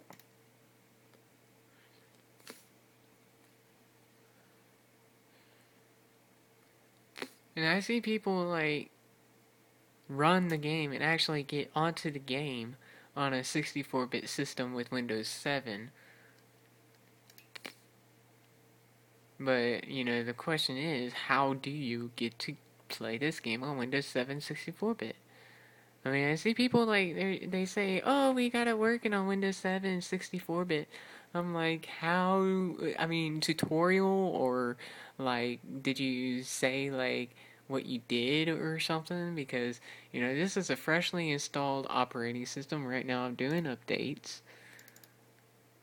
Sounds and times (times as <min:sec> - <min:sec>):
Inside, small room: 0:00.0 - 0:45.8
Speech: 0:07.2 - 0:08.9, 0:10.1 - 0:16.0, 0:19.4 - 0:25.2, 0:26.0 - 0:44.5.